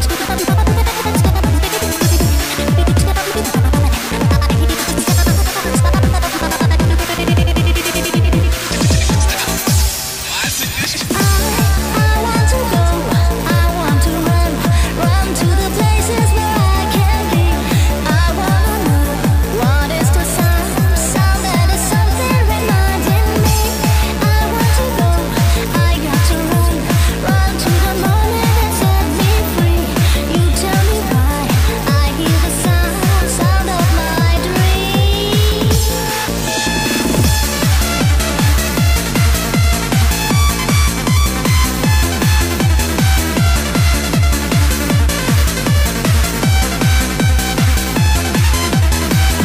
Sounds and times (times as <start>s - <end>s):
Music: 0.0s - 49.4s.